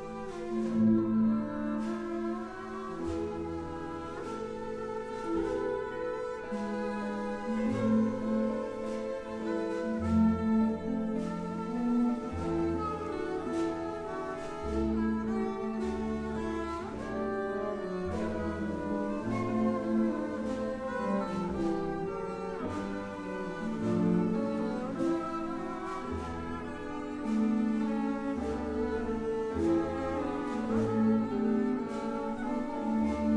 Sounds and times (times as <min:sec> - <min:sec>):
Cello: 0:00.0 - 0:33.3
Orchestra: 0:00.0 - 0:33.3.